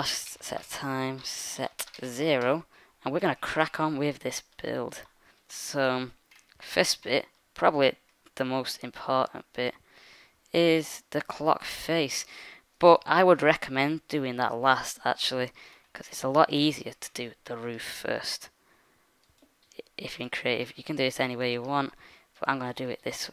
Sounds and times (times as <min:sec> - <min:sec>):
Speech: 0:00.0 - 0:09.8, 0:10.5 - 0:18.5, 0:19.8 - 0:23.3.